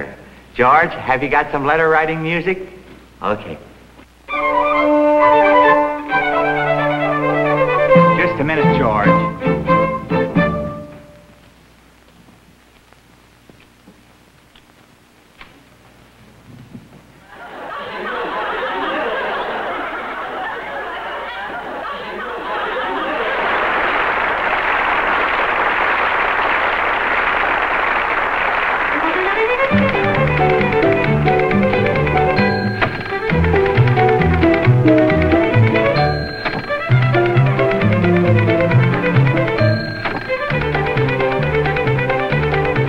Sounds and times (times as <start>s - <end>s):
Speech: 0.0s - 3.7s, 8.2s - 9.2s
Orchestra: 4.3s - 11.4s, 28.4s - 42.8s.